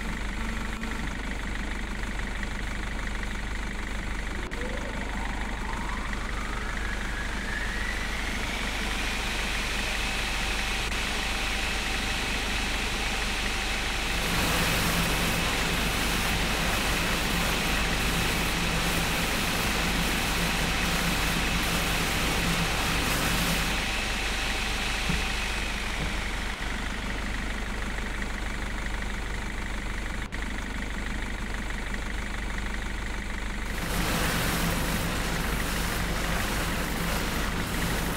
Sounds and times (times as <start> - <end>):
Outside, urban or manmade: 0.0 - 38.1
Truck: 0.0 - 38.1.